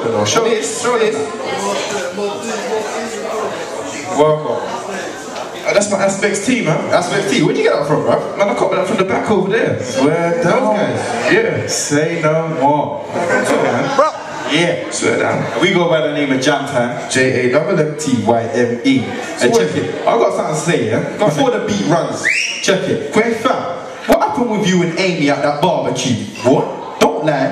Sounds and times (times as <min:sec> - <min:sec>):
Speech: 0:00.0 - 0:27.5.